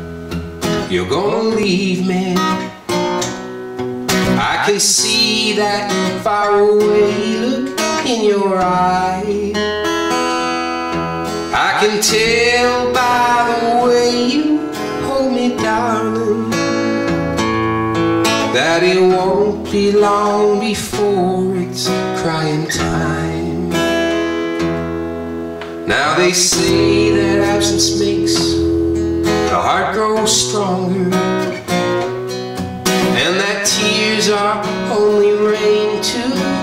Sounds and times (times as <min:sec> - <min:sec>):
Music: 0:00.0 - 0:36.6.